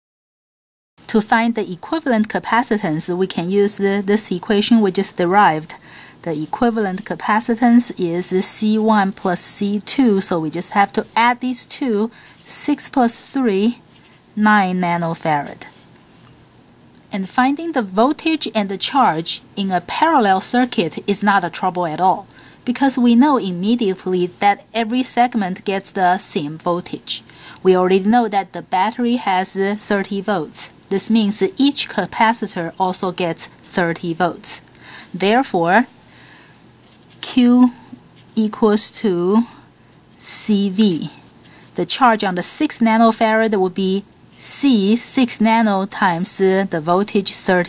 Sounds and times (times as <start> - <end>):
Speech: 1.1 - 13.8, 14.4 - 15.8, 17.1 - 36.0, 37.2 - 39.6, 40.2 - 47.6.